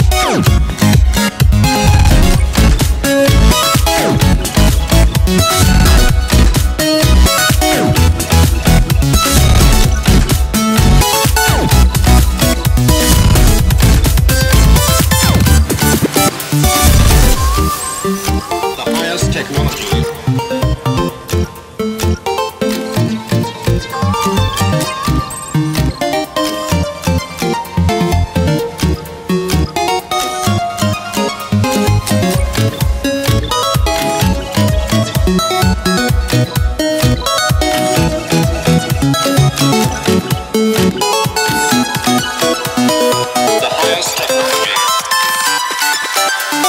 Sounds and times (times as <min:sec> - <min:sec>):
Electronic music: 0:00.0 - 0:46.6.